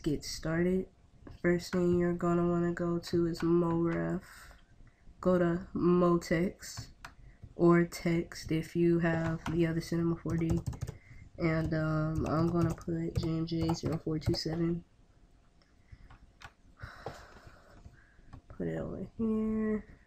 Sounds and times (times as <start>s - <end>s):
Speech: 0.0s - 4.6s, 5.2s - 6.9s, 7.6s - 10.6s, 11.4s - 14.9s, 18.5s - 19.9s.